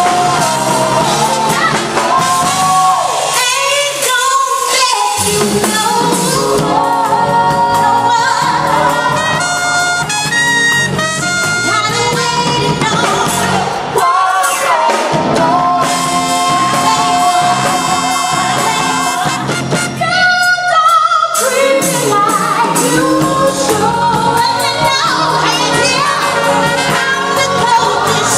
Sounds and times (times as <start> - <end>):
Saxophone: 4.7 - 13.8, 14.8 - 28.3
Singing: 11.7 - 28.3.